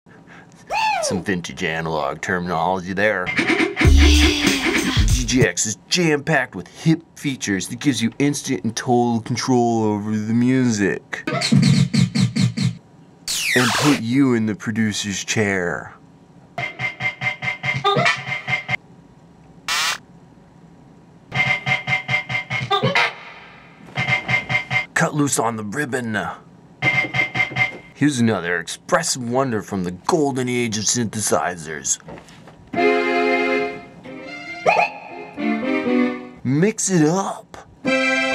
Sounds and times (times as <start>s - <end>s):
Speech: 1.0s - 3.3s, 5.1s - 11.3s, 13.6s - 16.0s, 25.0s - 26.5s, 28.0s - 32.0s, 36.4s - 37.7s.